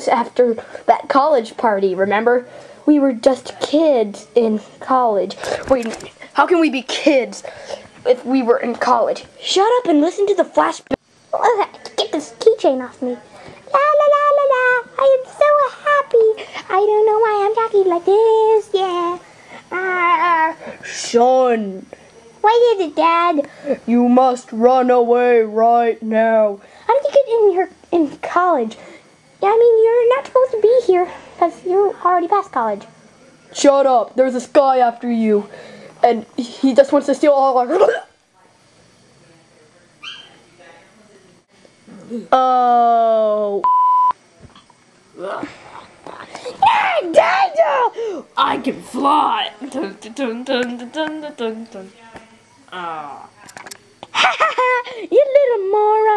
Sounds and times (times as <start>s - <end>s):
Speech: 0.0s - 28.8s, 29.4s - 43.6s, 45.2s - 56.1s
Inside, small room: 0.0s - 56.1s.